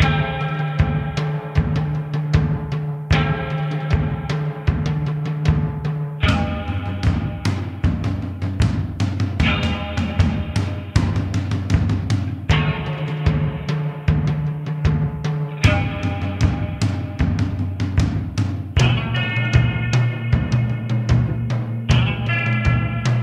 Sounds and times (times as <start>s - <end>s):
Music: 0.0s - 23.2s.